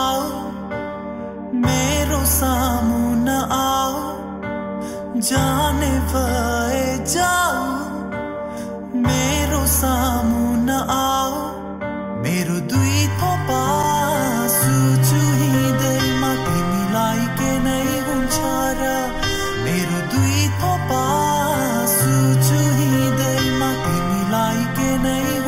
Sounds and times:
Music: 0:00.0 - 0:25.4.

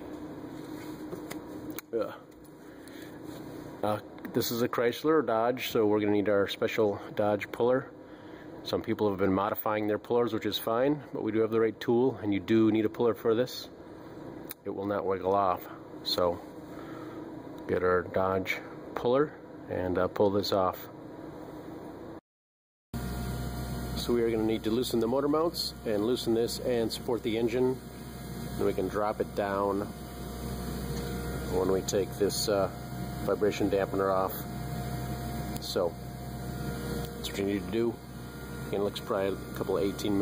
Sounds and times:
Speech: 0:01.9 - 0:02.2, 0:03.8 - 0:08.0, 0:08.6 - 0:13.8, 0:14.6 - 0:16.5, 0:17.7 - 0:21.0, 0:24.0 - 0:27.8, 0:28.6 - 0:30.0, 0:31.5 - 0:34.4, 0:35.6 - 0:36.0, 0:37.2 - 0:38.0, 0:38.7 - 0:40.2.

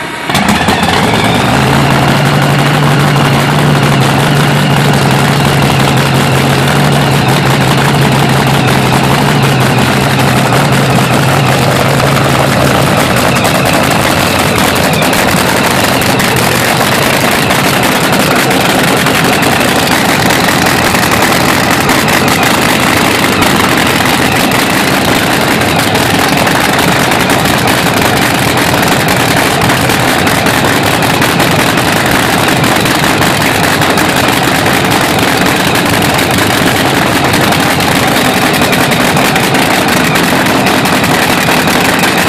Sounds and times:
Car: 0:00.0 - 0:42.2.

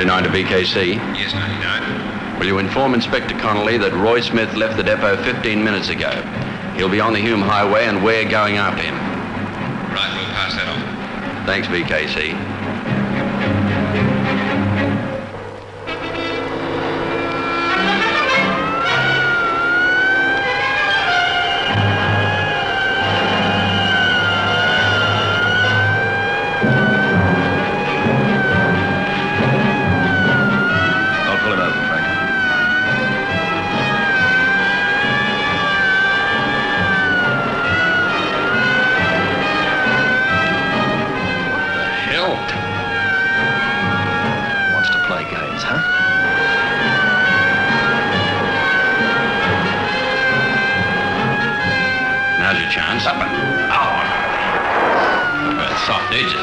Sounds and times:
Speech: 0:00.0 - 0:09.0, 0:10.0 - 0:10.9, 0:11.5 - 0:12.4, 0:31.3 - 0:32.0, 0:41.9 - 0:42.6, 0:44.8 - 0:45.9, 0:52.4 - 0:54.4, 0:55.6 - 0:56.4.

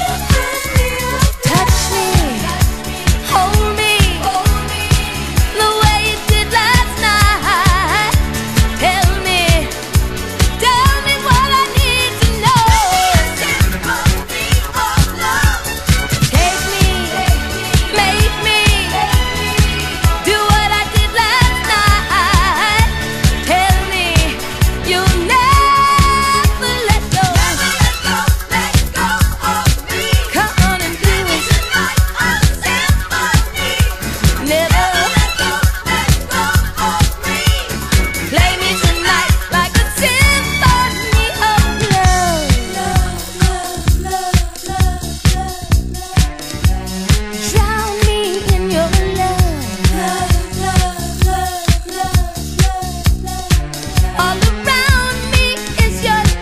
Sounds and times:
Funk: 0:00.0 - 0:56.4.

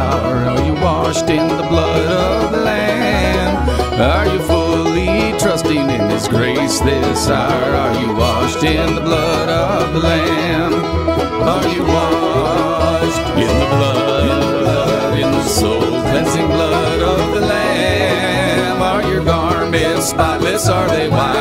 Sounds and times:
Bluegrass: 0:00.0 - 0:21.4.

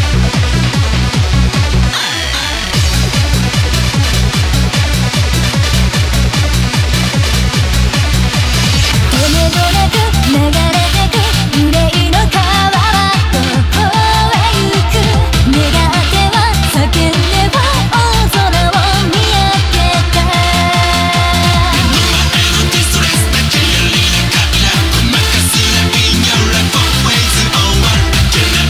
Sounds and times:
Music: 0:00.0 - 0:28.7.

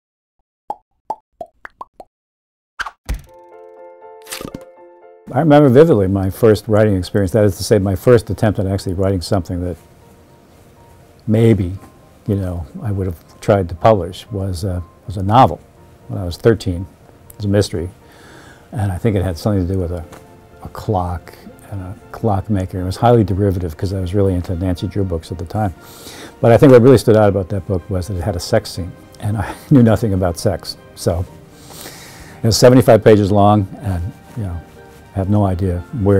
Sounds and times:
Music: 0:03.2 - 0:36.1
Speech: 0:05.3 - 0:09.8, 0:11.3 - 0:18.0, 0:18.8 - 0:25.8, 0:26.4 - 0:31.3, 0:32.4 - 0:34.6, 0:35.2 - 0:36.1.

